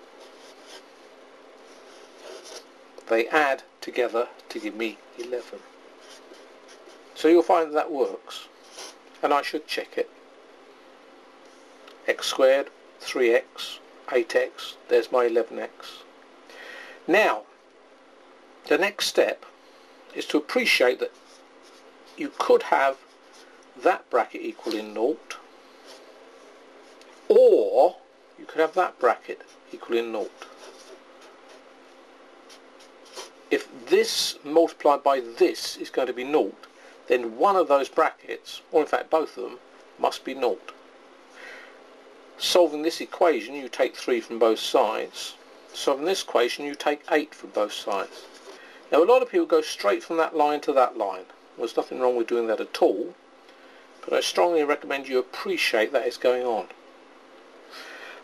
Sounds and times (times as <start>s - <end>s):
Inside, small room: 0.0s - 58.2s
Speech: 3.0s - 5.6s, 7.2s - 8.5s, 9.2s - 10.1s, 12.0s - 16.1s, 17.1s - 17.5s, 18.7s - 19.5s, 20.1s - 21.2s, 22.2s - 23.0s, 23.8s - 25.4s, 27.3s - 30.5s, 33.5s - 40.8s, 42.4s - 48.3s, 48.9s - 53.2s, 54.0s - 56.8s.